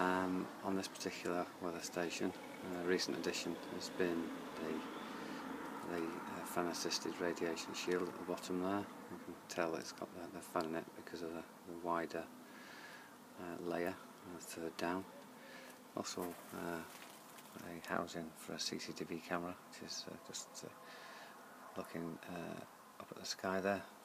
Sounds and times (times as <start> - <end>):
Speech: 0.0 - 4.8, 5.8 - 12.3, 13.4 - 15.1, 16.0 - 16.9, 17.6 - 20.7, 21.8 - 23.9.